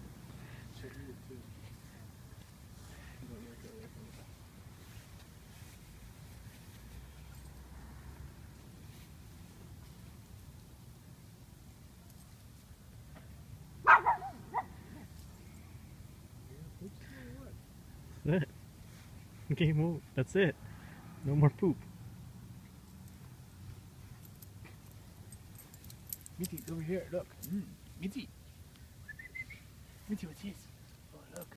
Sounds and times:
Speech: 30.1s - 31.5s.

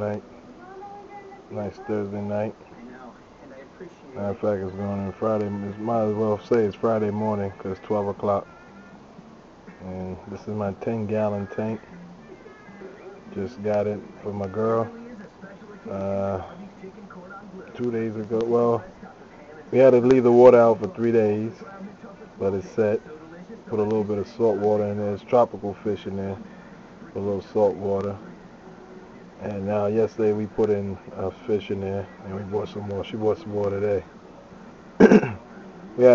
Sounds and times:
Speech: 0.0s - 8.5s, 9.8s - 12.0s, 12.9s - 28.5s, 29.2s - 34.1s, 35.4s - 36.1s.

